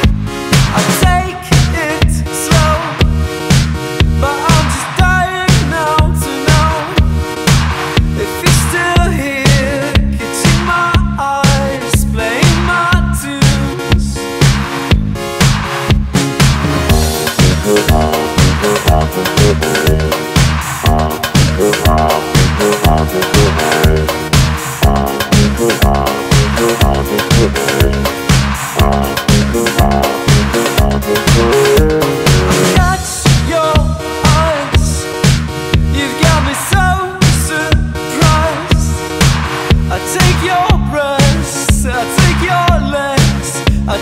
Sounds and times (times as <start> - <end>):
Music: 0.0 - 44.0.